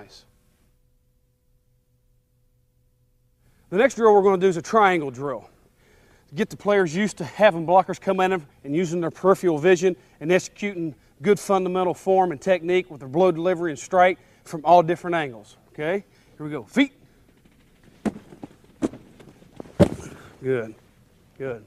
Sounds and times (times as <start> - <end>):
Speech: 0.0 - 0.3, 3.7 - 5.5, 6.3 - 17.0, 20.4 - 20.8, 21.4 - 21.6.